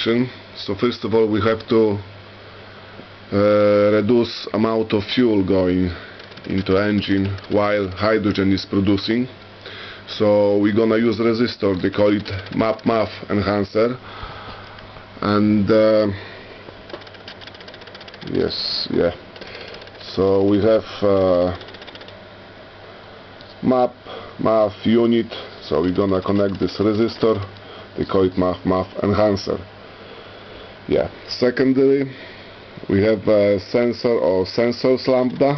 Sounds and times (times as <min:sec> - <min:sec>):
Speech: 0:00.0 - 0:02.1, 0:03.3 - 0:09.4, 0:10.1 - 0:14.0, 0:15.2 - 0:16.2, 0:18.2 - 0:19.2, 0:20.0 - 0:21.6, 0:23.6 - 0:29.7, 0:30.9 - 0:32.2, 0:32.9 - 0:35.5.